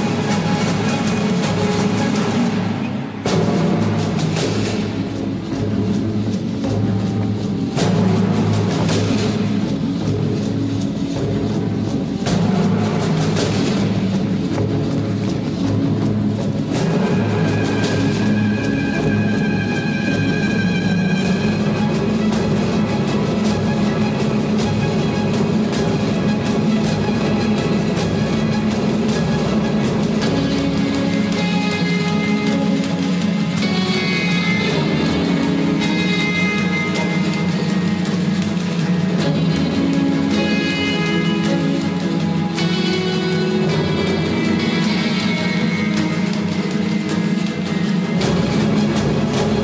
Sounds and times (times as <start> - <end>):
Music: 0.0 - 49.6.